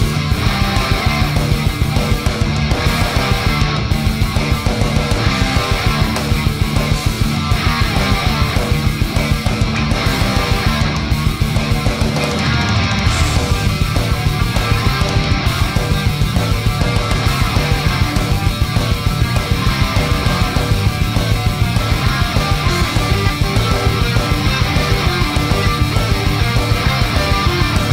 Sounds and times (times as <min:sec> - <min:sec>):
Electric guitar: 0:00.0 - 0:27.9.